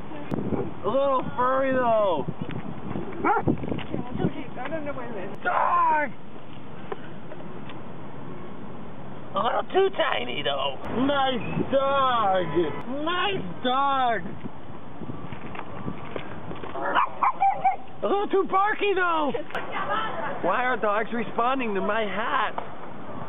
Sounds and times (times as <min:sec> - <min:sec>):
Outside, urban or manmade: 0:00.0 - 0:23.2
Dog: 0:03.2 - 0:03.5, 0:16.8 - 0:17.9.